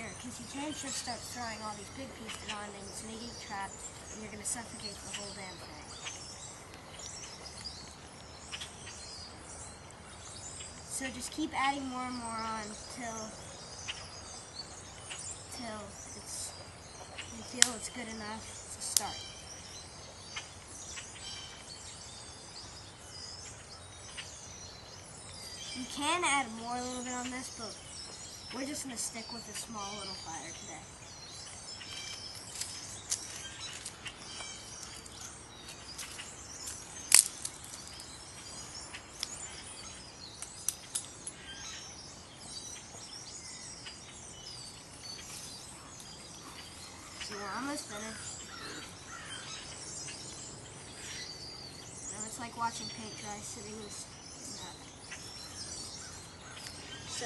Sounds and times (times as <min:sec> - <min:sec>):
Speech: 0:00.0 - 0:06.0, 0:10.9 - 0:13.4, 0:15.5 - 0:16.6, 0:17.3 - 0:19.2, 0:25.8 - 0:27.8, 0:28.5 - 0:30.9, 0:47.3 - 0:48.3, 0:52.1 - 0:54.8
Environmental noise: 0:00.0 - 0:57.2.